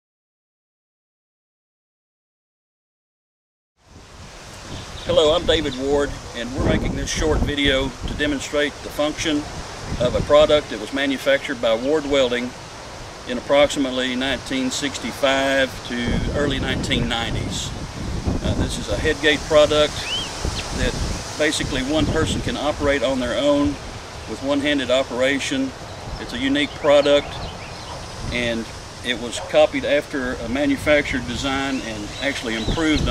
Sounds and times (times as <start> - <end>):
Wind: 3.8 - 33.1
Speech: 5.1 - 12.5, 13.3 - 17.8, 18.4 - 20.1, 20.7 - 27.4, 28.3 - 33.1.